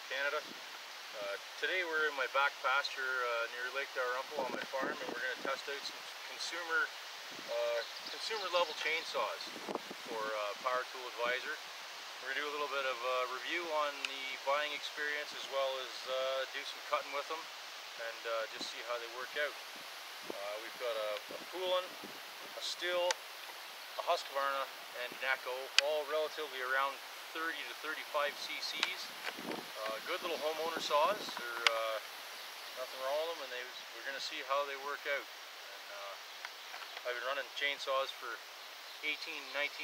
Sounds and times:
Speech: 0.0s - 0.5s, 1.2s - 6.9s, 7.5s - 9.5s, 10.1s - 11.6s, 12.2s - 19.6s, 20.3s - 21.9s, 22.6s - 23.2s, 24.0s - 29.1s, 29.8s - 32.0s, 32.8s - 36.2s, 37.0s - 38.4s, 39.0s - 39.8s.

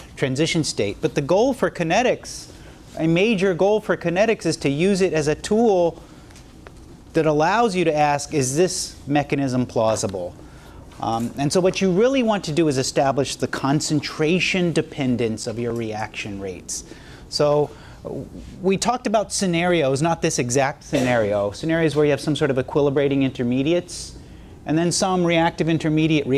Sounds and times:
Speech: 0.2s - 6.0s, 7.1s - 10.4s, 11.0s - 26.3s.

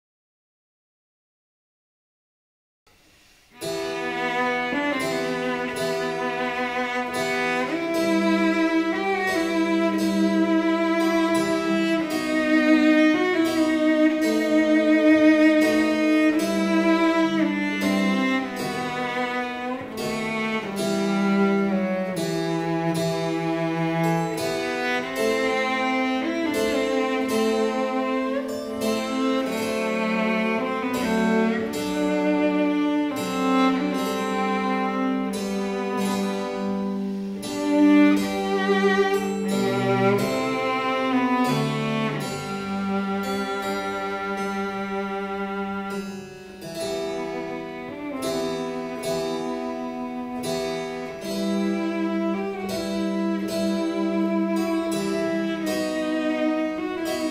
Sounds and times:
Pizzicato: 3.4s - 57.3s
Harp: 3.5s - 57.3s.

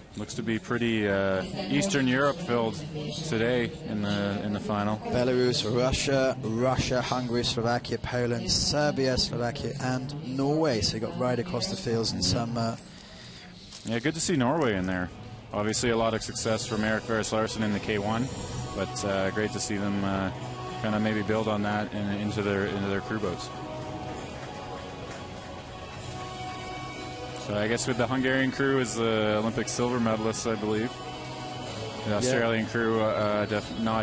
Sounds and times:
Music: 0.0s - 34.0s
Speech: 0.2s - 12.8s, 13.8s - 23.5s, 27.4s - 30.9s, 32.1s - 34.0s.

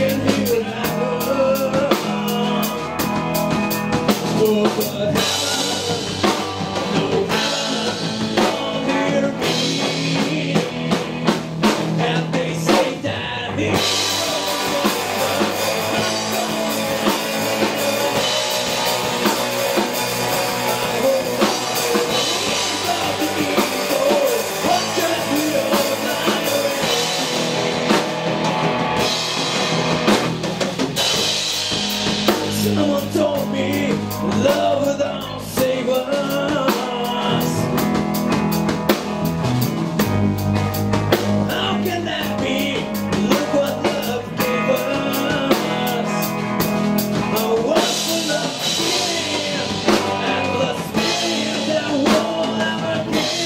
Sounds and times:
Music: 0.0s - 53.4s.

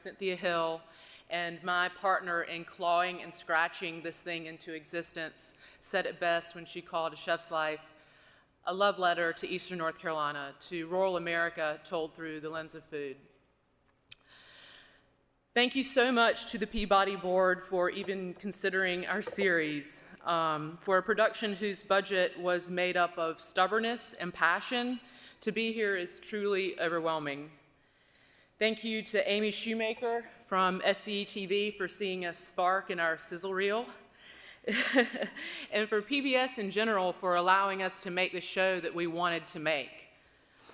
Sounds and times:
Female speech, woman speaking: 8.7s - 13.2s, 15.6s - 27.5s, 28.6s - 33.9s, 35.8s - 39.9s.

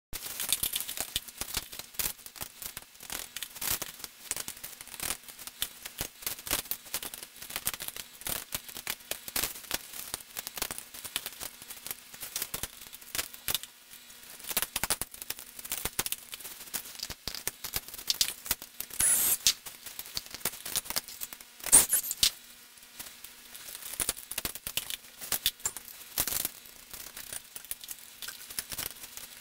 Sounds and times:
Crackle: 0.1s - 29.4s.

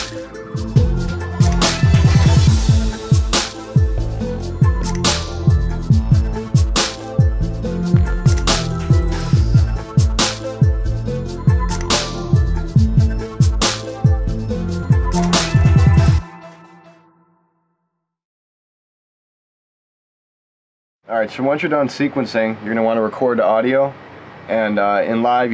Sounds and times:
Musical instrument: 0.0s - 17.5s.

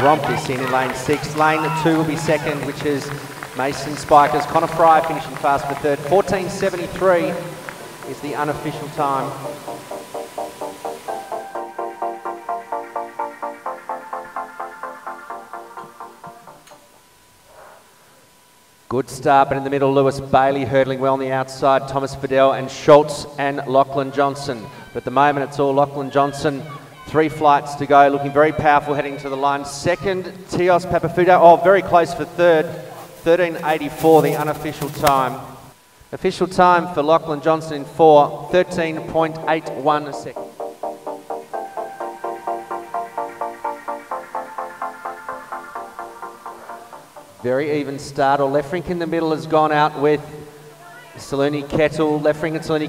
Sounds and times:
Speech: 0.0s - 7.4s, 18.9s - 35.4s, 36.1s - 40.4s, 47.4s - 52.8s
Music: 0.0s - 17.1s, 38.7s - 48.3s.

